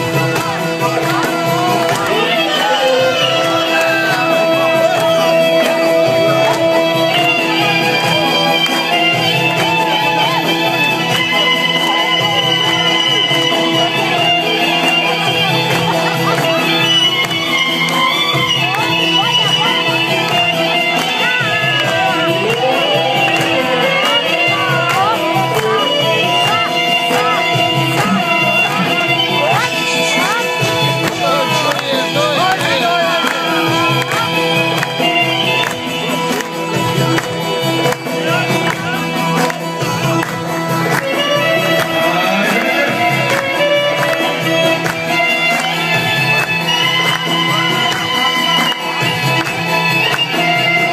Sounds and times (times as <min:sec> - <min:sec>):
Speech: 0:00.0 - 0:17.2, 0:18.2 - 0:44.8
Inside, large room or hall: 0:00.0 - 0:50.9
Music: 0:00.0 - 0:50.9.